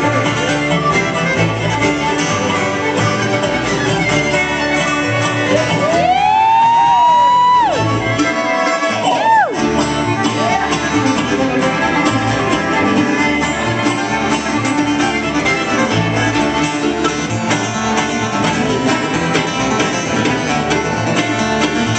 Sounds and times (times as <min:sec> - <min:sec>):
Blues: 0:00.0 - 0:21.9
Violin, fiddle: 0:00.0 - 0:21.9.